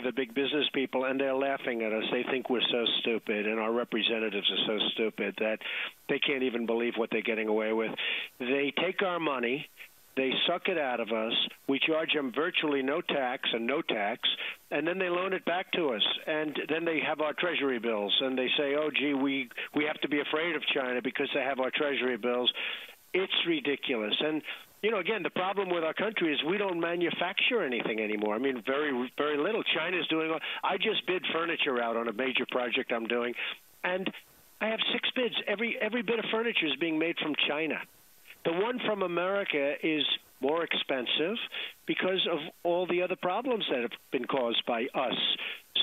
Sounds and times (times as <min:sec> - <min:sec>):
Speech: 0:00.0 - 0:45.8.